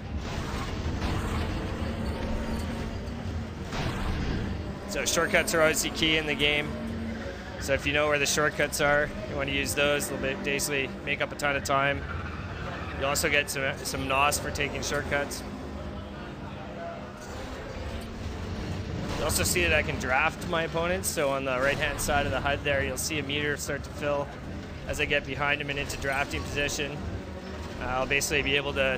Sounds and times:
Speech: 4.9 - 6.8, 7.6 - 12.0, 13.0 - 15.5, 19.1 - 24.3, 24.9 - 27.0, 27.8 - 28.9.

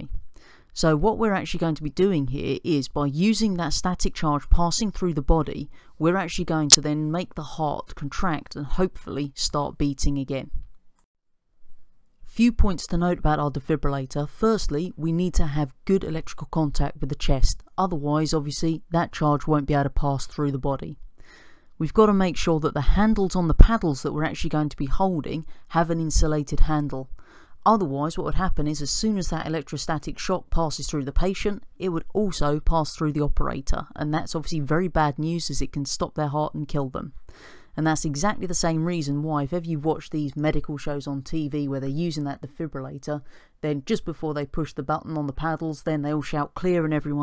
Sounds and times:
Speech: 0.0 - 0.2, 0.8 - 10.6, 12.3 - 21.0, 21.8 - 37.2, 37.8 - 47.2.

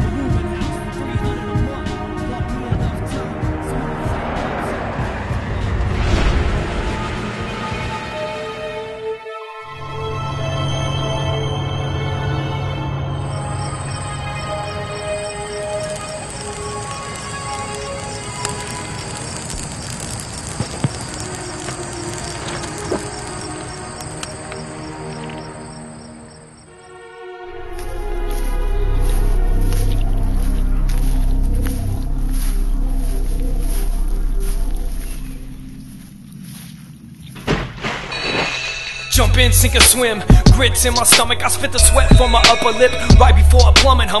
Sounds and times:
Scary music: 0.0 - 44.2.

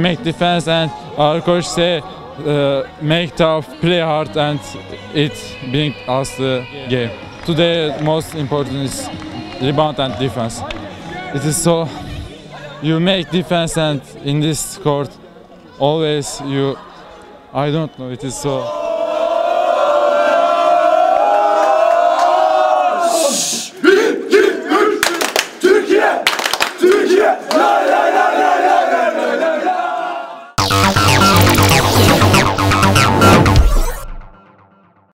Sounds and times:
Music: 0.0 - 15.8, 30.6 - 35.1.

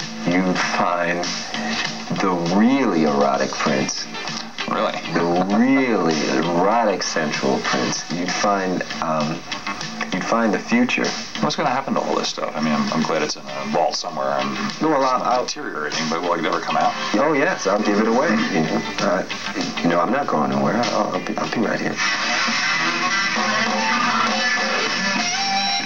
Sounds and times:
Music: 0.0 - 25.8
Speech: 0.3 - 1.3, 2.1 - 9.4, 10.0 - 22.0.

